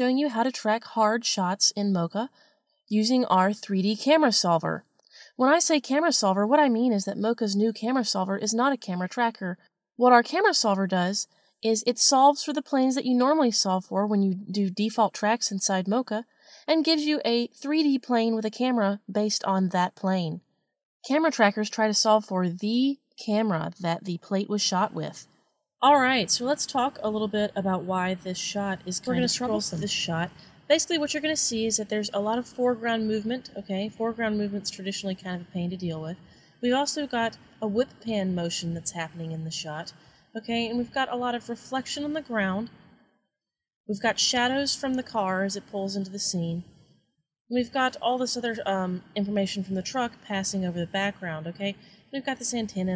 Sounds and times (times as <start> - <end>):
Speech: 0.0 - 2.3, 2.9 - 20.4, 21.1 - 25.2, 25.8 - 42.7, 43.9 - 46.6, 47.5 - 52.9.